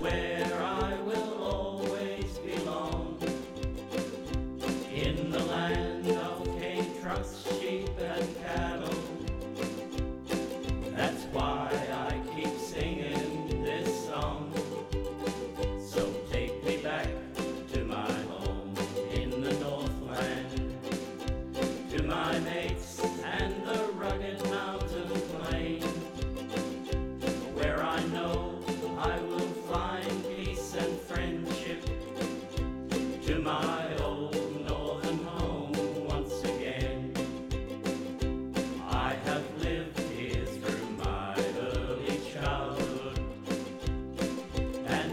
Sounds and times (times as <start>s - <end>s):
Ukulele: 0.0s - 45.1s.